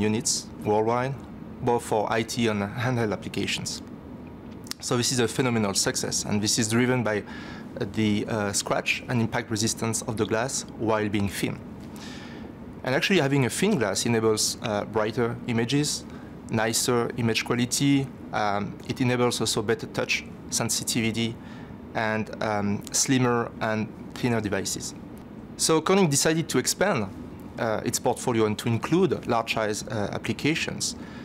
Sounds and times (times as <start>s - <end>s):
Speech: 0.0s - 3.9s, 4.7s - 11.6s, 12.8s - 21.4s, 22.0s - 25.0s, 25.6s - 31.0s.